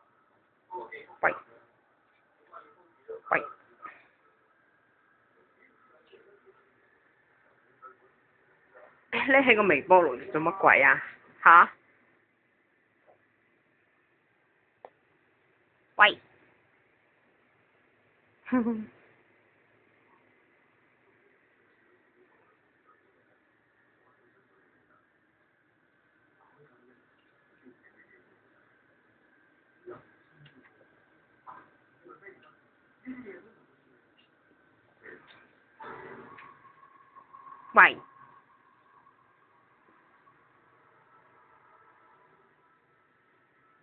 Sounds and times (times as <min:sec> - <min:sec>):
Speech: 0:00.7 - 0:01.7, 0:08.8 - 0:11.7.